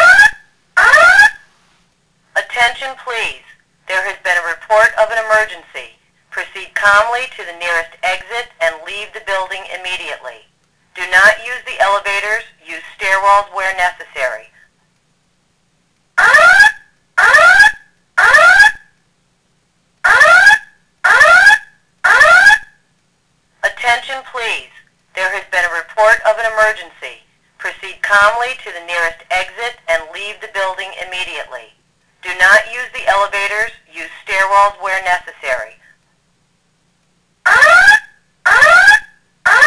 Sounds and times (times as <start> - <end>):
Fire alarm: 0.0 - 1.4, 16.2 - 18.9, 20.1 - 22.8, 37.5 - 39.6
Speech: 2.4 - 14.6, 23.6 - 36.0.